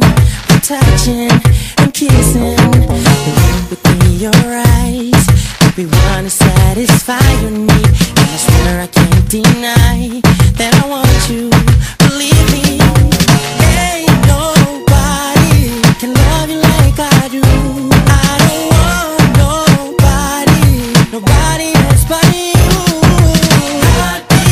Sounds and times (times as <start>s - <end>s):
Music: 0.0s - 24.5s.